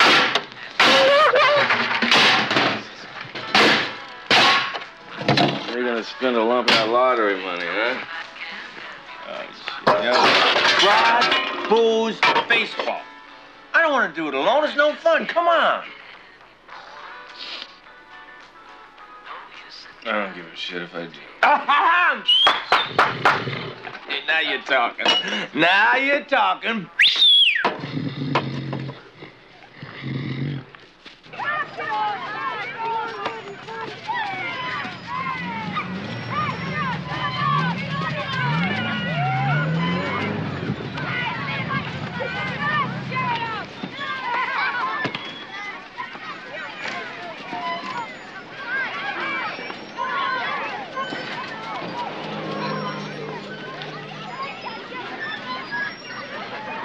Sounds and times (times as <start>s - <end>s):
Outside, urban or manmade: 0.0s - 56.8s
Roar: 22.9s - 23.9s, 27.8s - 30.7s, 51.8s - 54.3s.